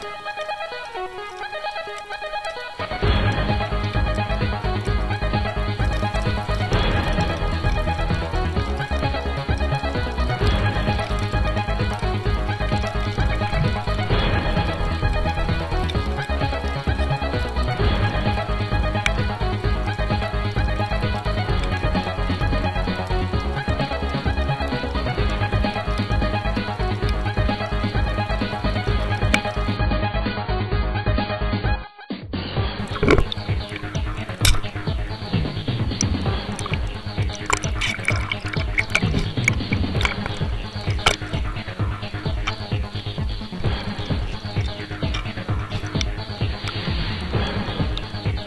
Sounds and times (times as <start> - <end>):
Music: 0.0 - 48.4.